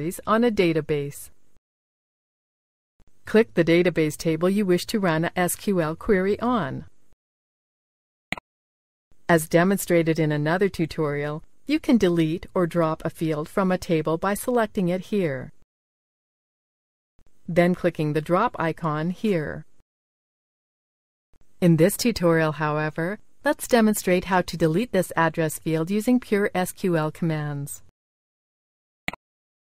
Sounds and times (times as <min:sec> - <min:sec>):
Speech: 0:00.0 - 0:01.3, 0:03.3 - 0:06.9, 0:09.3 - 0:15.5, 0:17.5 - 0:19.7, 0:21.6 - 0:27.9.